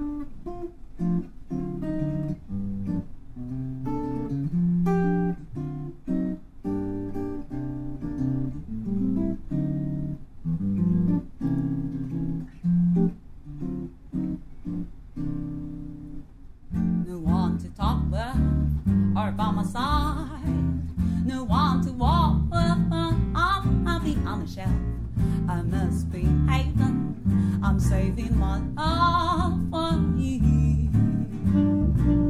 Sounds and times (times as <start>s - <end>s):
Guitar: 0.0s - 32.2s.